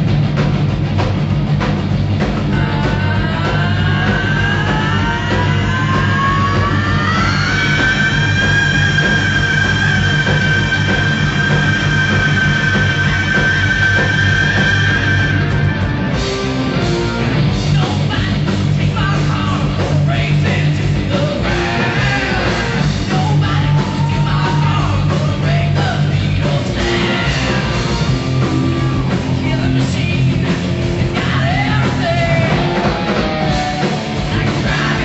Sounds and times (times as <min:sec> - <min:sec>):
Heavy metal: 0:00.0 - 0:35.0
Progressive rock: 0:00.0 - 0:35.0
Punk rock: 0:00.0 - 0:35.0
Rock and roll: 0:00.0 - 0:35.0.